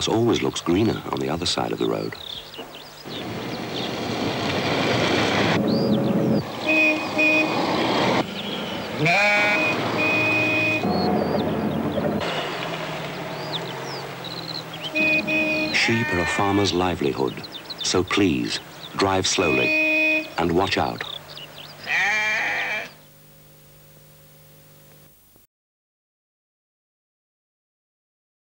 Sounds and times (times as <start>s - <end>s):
Speech: 0.0s - 2.2s, 15.8s - 19.8s, 20.4s - 21.2s
Bleat: 9.0s - 10.6s, 15.3s - 16.7s, 21.8s - 23.0s.